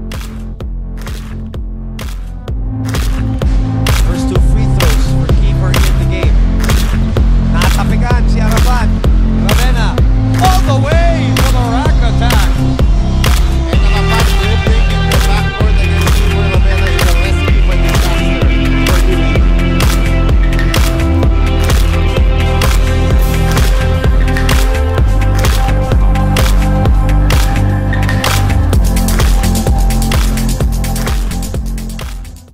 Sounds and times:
Music: 0.0s - 32.5s.

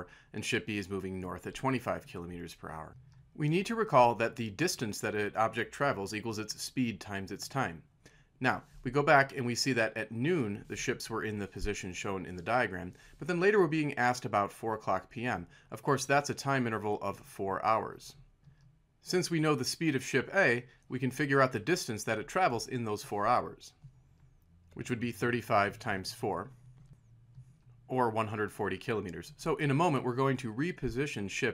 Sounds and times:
Speech: 0.0s - 18.2s, 19.0s - 23.8s, 24.8s - 26.6s, 27.9s - 31.5s.

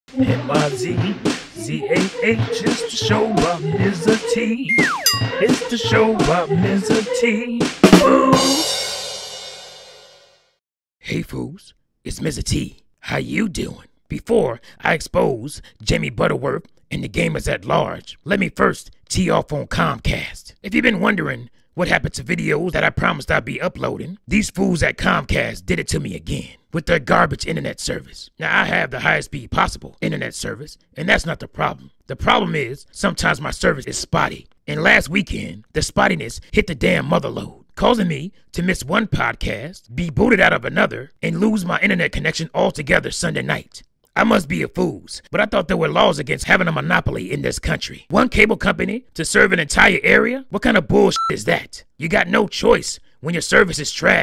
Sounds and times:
Hi-hat: 0.2s - 4.4s.

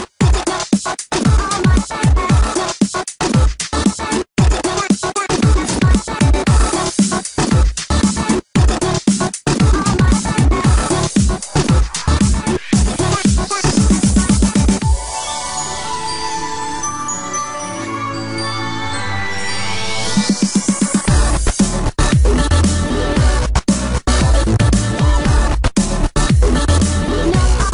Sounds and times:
Electronic dance music: 0.0s - 27.7s.

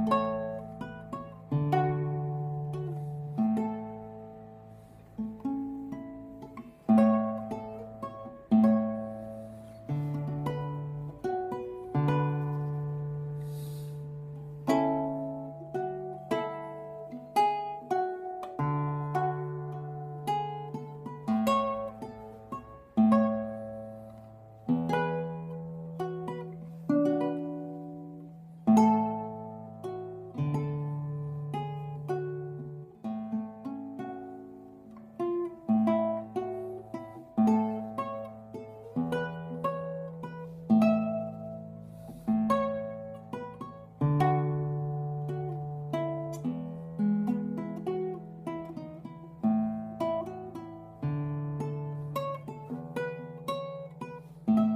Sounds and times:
Acoustic guitar: 0.0s - 54.7s.

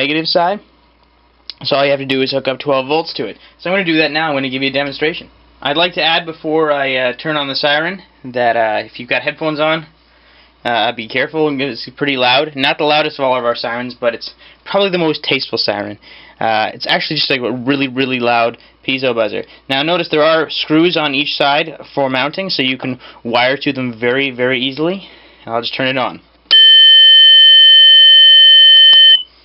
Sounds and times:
Speech: 0.0s - 0.7s, 1.5s - 10.0s, 10.6s - 26.3s.

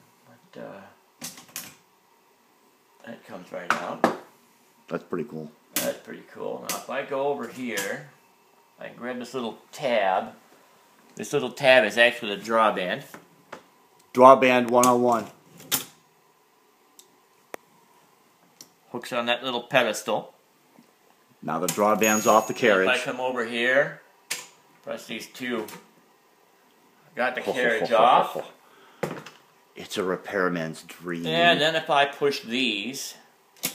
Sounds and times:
Speech: 3.0s - 4.0s, 11.2s - 13.1s, 18.9s - 20.4s, 21.4s - 24.0s, 24.9s - 25.8s, 27.2s - 28.5s, 29.8s - 33.3s.

